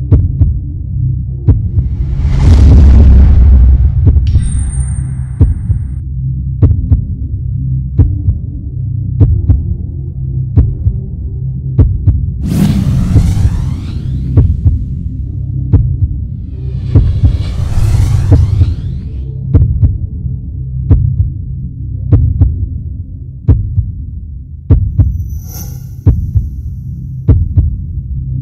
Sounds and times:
Sound effect: 0:01.5 - 0:06.0, 0:12.4 - 0:15.6, 0:16.3 - 0:19.6, 0:25.0 - 0:27.2.

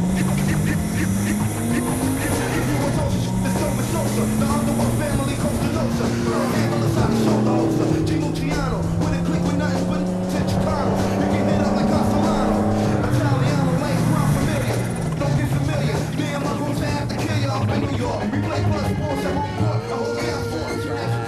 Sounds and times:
Music: 0:00.0 - 0:21.2
Car passing by: 0:01.8 - 0:15.4.

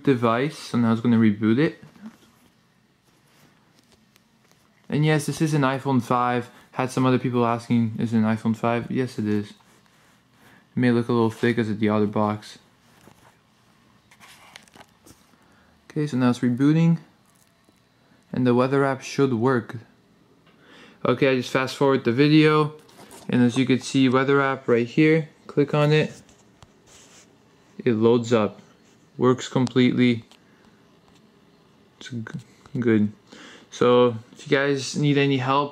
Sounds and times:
Speech: 0:00.0 - 0:02.2, 0:04.9 - 0:09.7, 0:10.8 - 0:12.7, 0:15.9 - 0:17.2, 0:18.3 - 0:20.0, 0:21.0 - 0:26.3, 0:27.8 - 0:30.3, 0:32.0 - 0:35.7.

